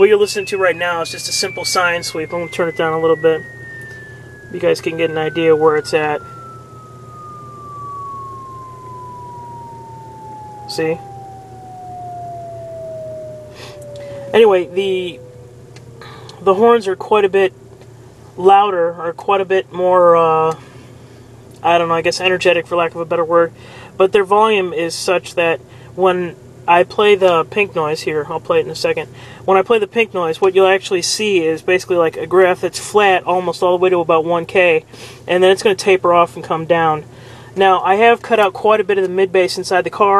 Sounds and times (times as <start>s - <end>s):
Speech: 0.0s - 3.4s, 4.6s - 6.2s, 14.3s - 15.2s, 16.4s - 17.5s, 18.4s - 20.6s, 21.6s - 40.1s.